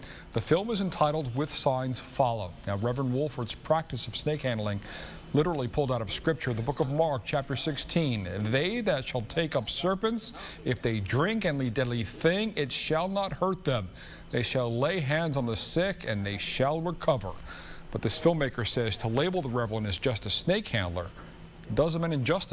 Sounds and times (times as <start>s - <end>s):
Speech: 0.4s - 22.5s.